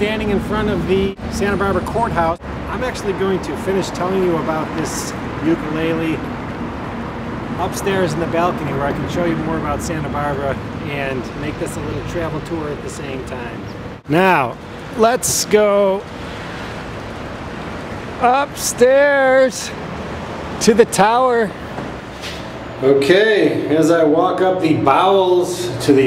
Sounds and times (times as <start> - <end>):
Speech: 0.0 - 6.2, 7.6 - 16.0, 18.2 - 19.8, 20.6 - 21.6, 22.8 - 26.0.